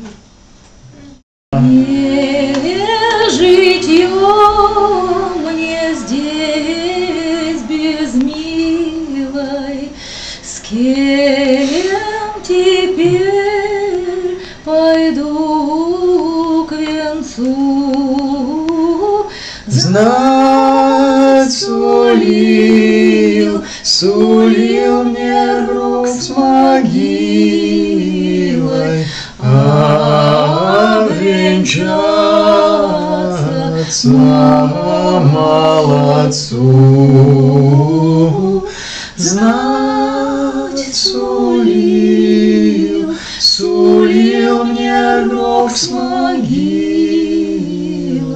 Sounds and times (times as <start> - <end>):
A capella: 0.0 - 48.3
Singing: 1.0 - 48.3.